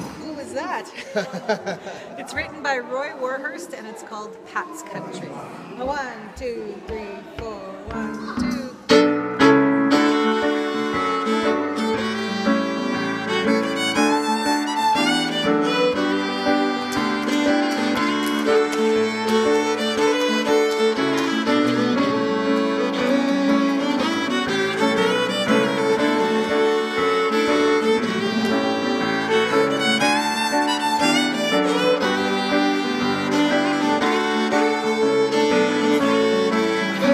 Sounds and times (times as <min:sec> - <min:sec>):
Violin, fiddle: 0:08.2 - 0:37.1.